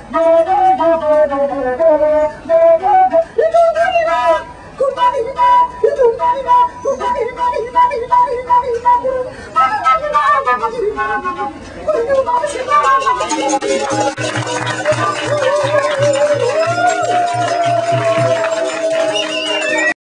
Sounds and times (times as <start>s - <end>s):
Flute: 0.0s - 20.0s.